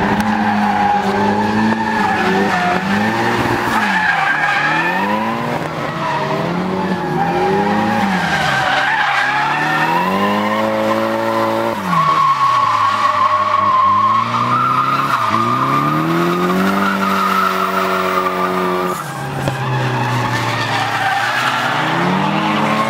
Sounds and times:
Race car, auto racing: 0.0s - 22.9s
Skidding: 0.0s - 22.9s.

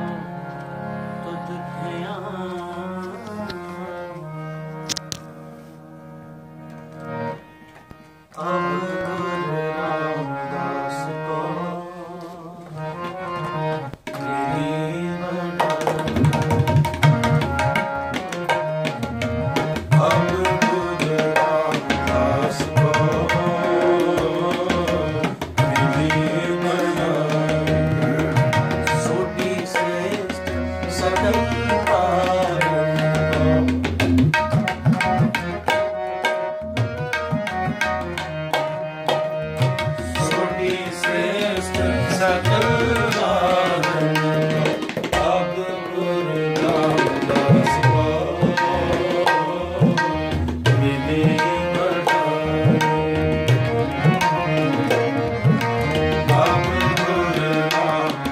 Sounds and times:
Tabla: 0.0s - 5.6s, 12.6s - 58.3s.

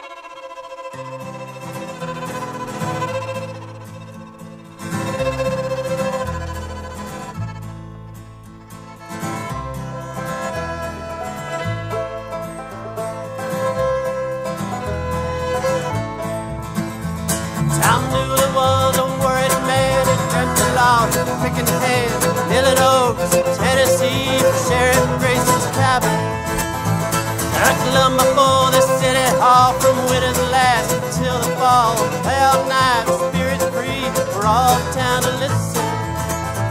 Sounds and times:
Bluegrass: 0.0s - 36.7s.

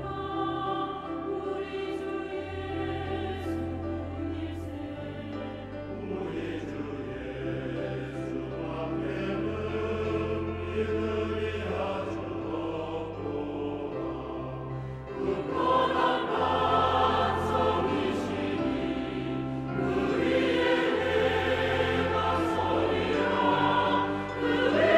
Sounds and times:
Choir: 0.0s - 24.9s.

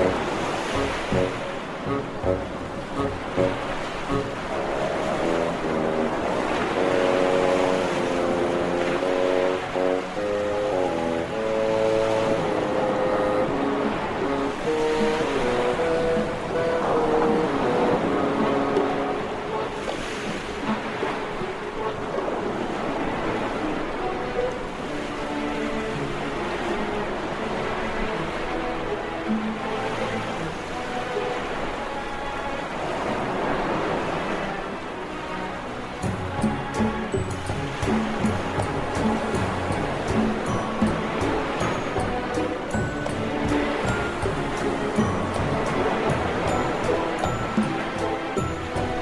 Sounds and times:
Soundtrack music: 0.0s - 25.0s, 35.8s - 49.0s.

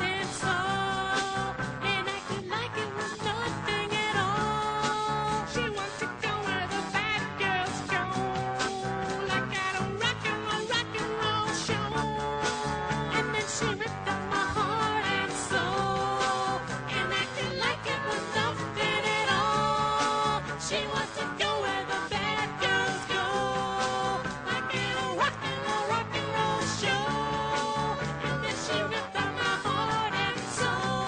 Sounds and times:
Rock and roll: 0.0s - 31.0s.

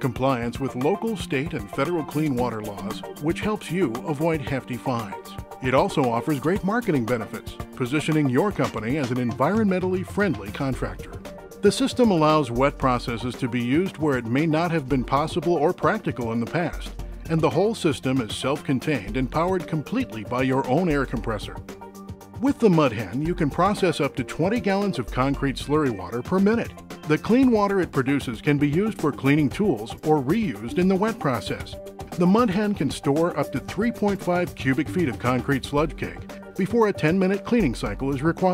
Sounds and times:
Speech: 0.0s - 21.6s, 22.4s - 38.5s
Music: 0.0s - 38.5s.

